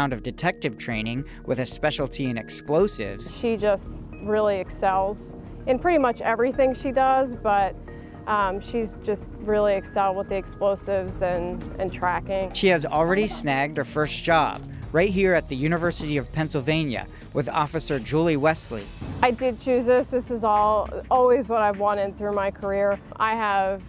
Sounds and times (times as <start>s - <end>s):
Music: 0.0s - 23.8s
Speech: 11.9s - 23.8s.